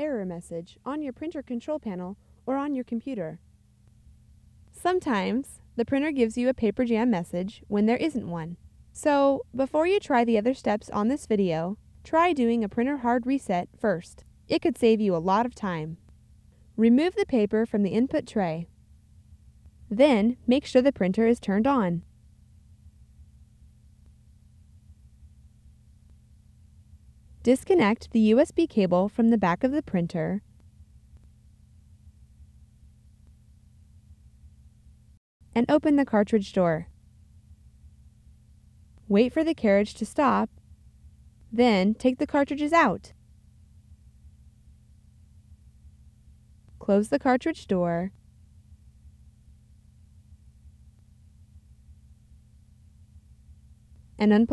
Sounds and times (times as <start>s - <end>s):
Speech: 0.0s - 3.4s, 4.8s - 16.0s, 16.8s - 18.7s, 19.9s - 22.0s, 27.5s - 30.4s, 35.6s - 36.9s, 39.1s - 40.5s, 41.6s - 43.1s, 46.8s - 48.1s, 54.2s - 54.5s.